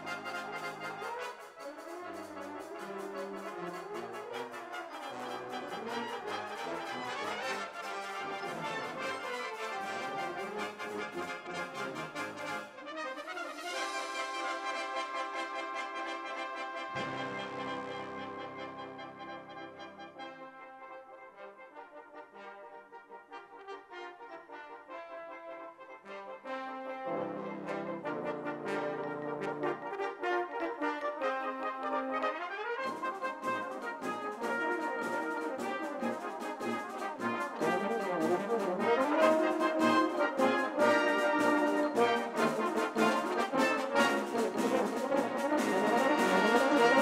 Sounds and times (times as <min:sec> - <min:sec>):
Trombone: 0:00.0 - 0:47.0.